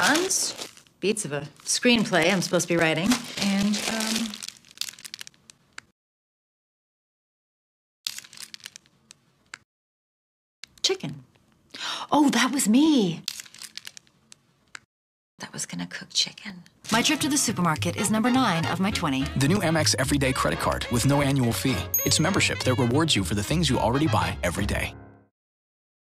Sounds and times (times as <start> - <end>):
Speech: 0.0 - 4.4, 10.9 - 11.2, 15.4 - 25.0
Music: 16.9 - 25.3.